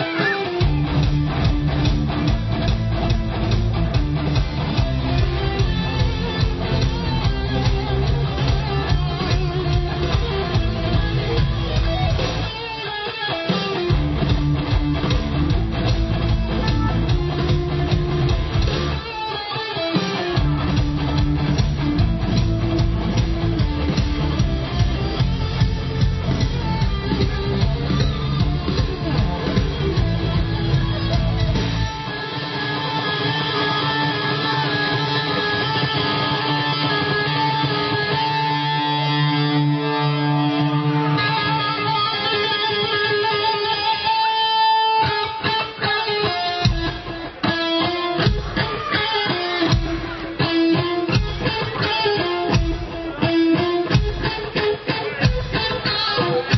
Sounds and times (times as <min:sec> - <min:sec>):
Musical instrument: 0:00.0 - 0:56.5.